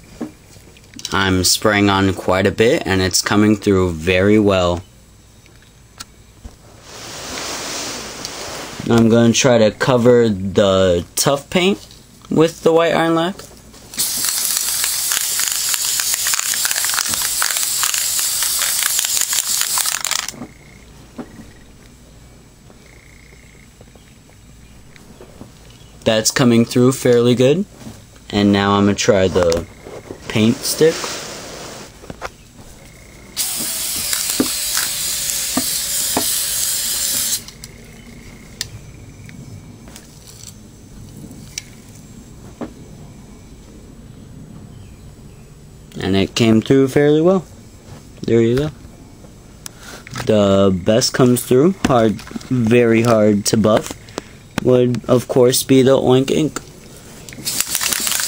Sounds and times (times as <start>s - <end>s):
Speech: 1.0s - 4.8s, 8.8s - 13.5s, 26.0s - 27.7s, 28.3s - 29.7s, 30.3s - 31.1s, 46.0s - 47.5s, 48.2s - 48.8s, 50.2s - 53.9s, 54.6s - 56.6s.